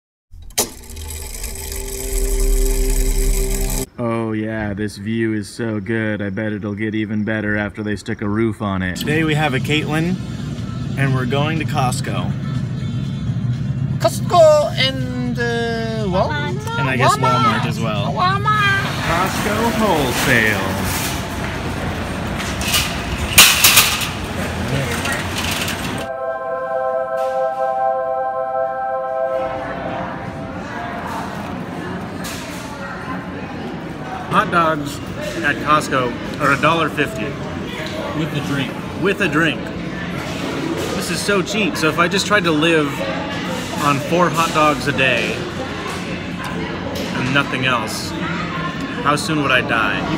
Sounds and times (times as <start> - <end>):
Outside, urban or manmade: 3.8 - 29.3
Speech: 4.0 - 10.2.